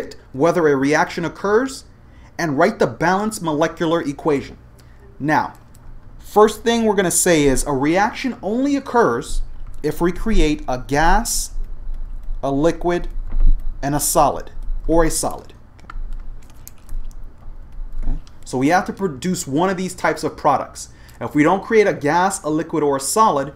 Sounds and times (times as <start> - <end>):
Speech: 0.0 - 4.6, 5.2 - 5.6, 6.2 - 11.6, 12.4 - 13.2, 13.8 - 15.6, 18.0 - 23.5.